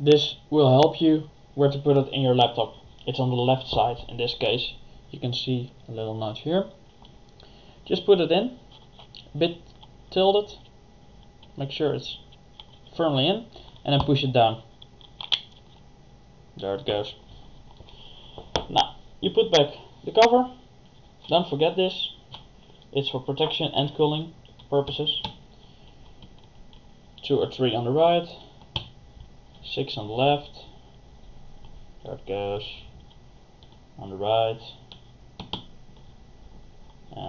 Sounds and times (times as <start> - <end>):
Speech: 0.0 - 6.8, 7.9 - 8.6, 9.2 - 10.6, 11.6 - 12.3, 12.9 - 14.7, 16.6 - 17.2, 18.7 - 20.6, 21.3 - 22.2, 22.9 - 25.3, 27.2 - 28.5, 29.6 - 30.8, 32.0 - 33.0, 34.0 - 34.9
Inside, small room: 0.0 - 37.2.